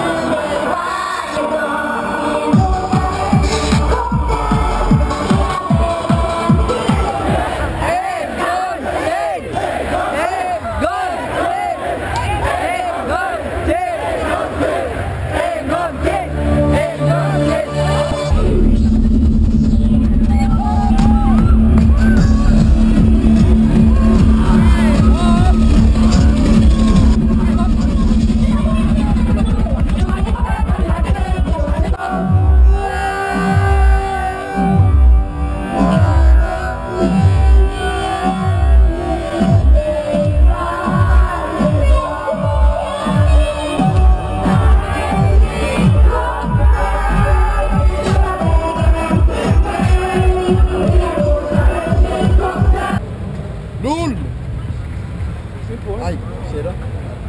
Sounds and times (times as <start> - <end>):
Dubstep: 2.5 - 7.6, 17.0 - 53.0.